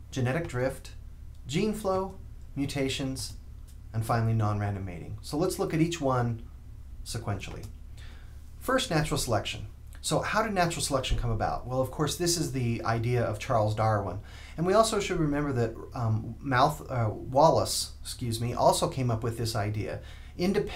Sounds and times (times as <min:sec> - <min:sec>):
Speech: 0:00.1 - 0:07.7, 0:08.6 - 0:20.7.